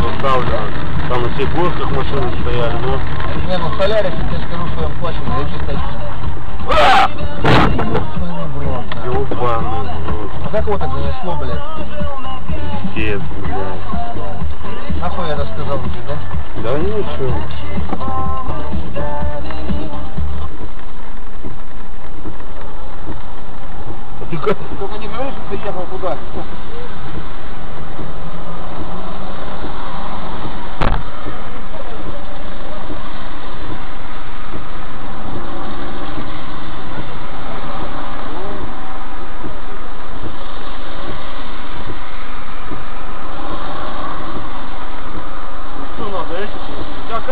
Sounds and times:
Car: 0.0 - 47.3.

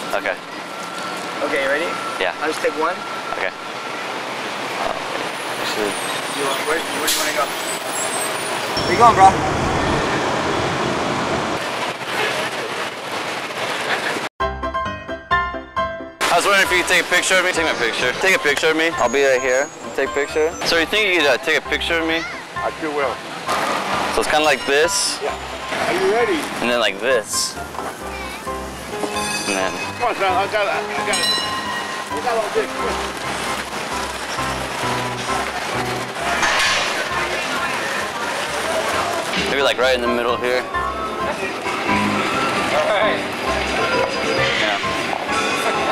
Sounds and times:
Music: 14.4 - 45.9.

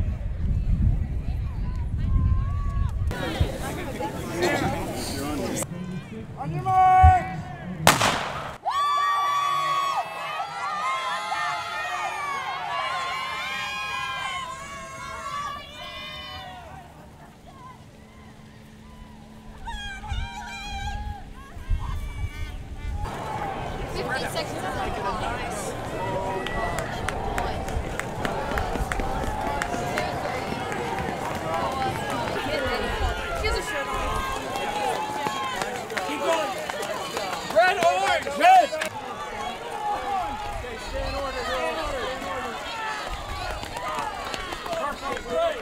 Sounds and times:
Run: 0.0 - 7.7, 8.6 - 45.6
Outside, rural or natural: 0.0 - 45.6.

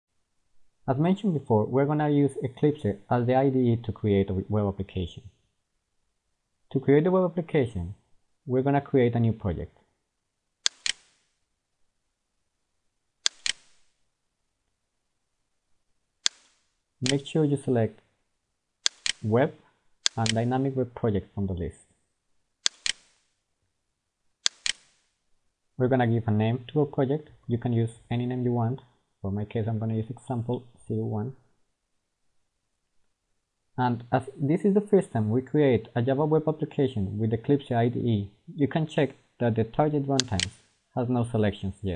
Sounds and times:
Inside, small room: 0.1 - 41.9
Speech: 0.9 - 5.3, 6.7 - 9.8, 17.0 - 18.0, 19.2 - 19.6, 20.2 - 21.8, 25.8 - 31.4, 33.8 - 41.9.

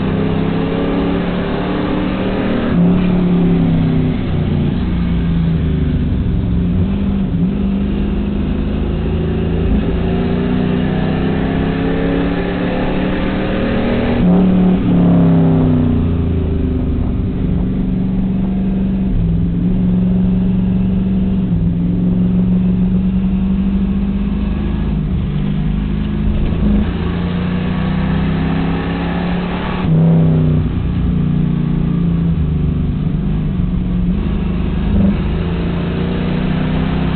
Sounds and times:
Accelerating, revving, vroom: 0.0 - 5.2, 6.8 - 16.4, 18.3 - 32.7, 34.0 - 37.1
Car: 0.0 - 37.1.

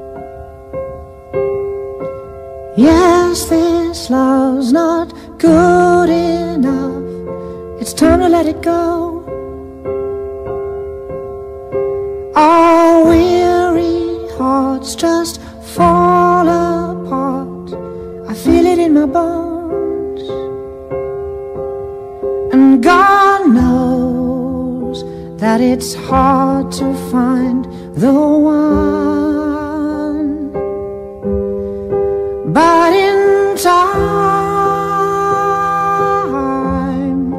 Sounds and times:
Piano: 0.0 - 37.3.

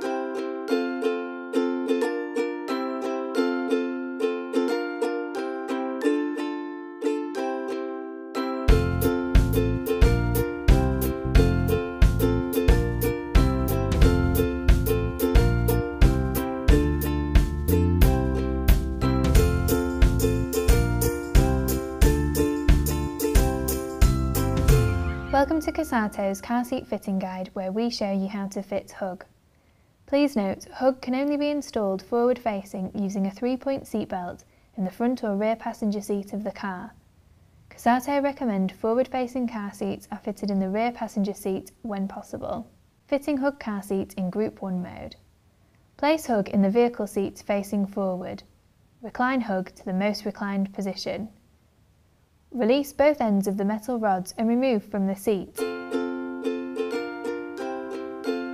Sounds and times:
Speech: 25.3 - 29.3, 30.1 - 37.0, 37.7 - 45.2, 46.0 - 51.4, 52.5 - 55.6.

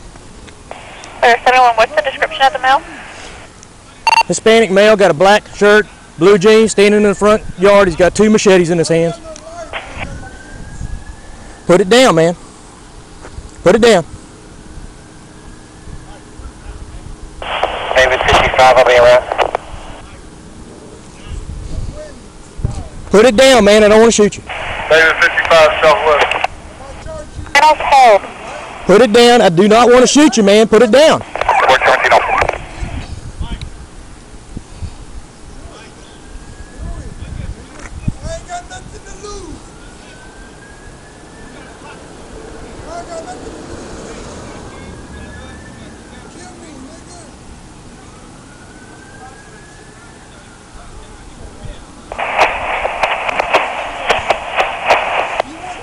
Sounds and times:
Outside, urban or manmade: 0.0 - 55.8.

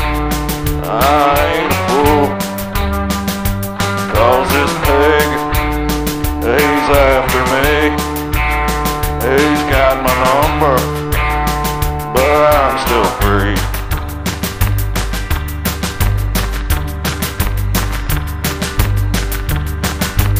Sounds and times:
Music: 0.0 - 20.3.

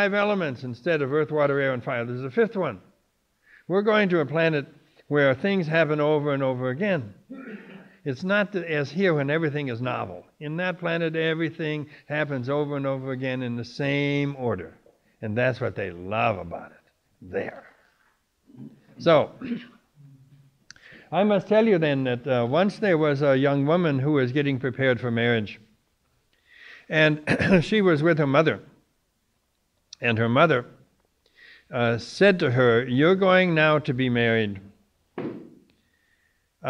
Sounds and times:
Speech: 0.0 - 2.9, 3.7 - 7.2, 8.0 - 17.8, 18.6 - 19.7, 21.1 - 25.7, 26.9 - 28.7, 30.0 - 30.8, 31.7 - 34.7.

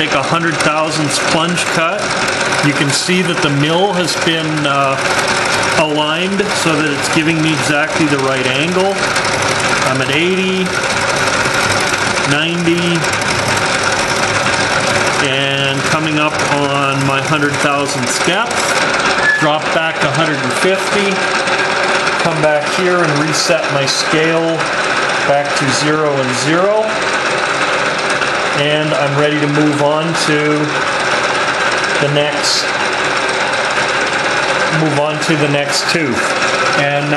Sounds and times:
Speech: 0.0 - 5.0, 5.8 - 9.0, 9.8 - 10.8, 12.3 - 13.1, 15.2 - 18.7, 19.3 - 21.3, 22.2 - 24.7, 25.3 - 27.0, 28.6 - 30.8, 32.0 - 32.7, 34.7 - 37.1
Inside, large room or hall: 0.0 - 37.1.

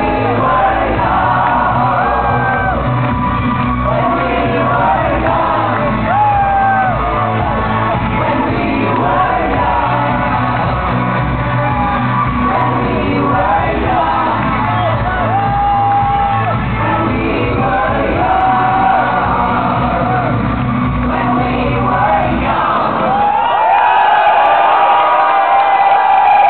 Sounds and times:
Singing: 0.0 - 24.4
Music: 0.0 - 26.4.

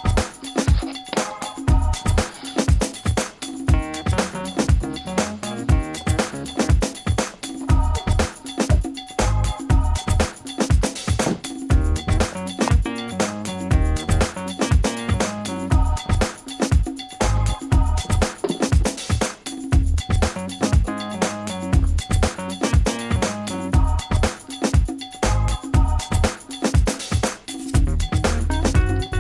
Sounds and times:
Music: 0.0 - 29.2.

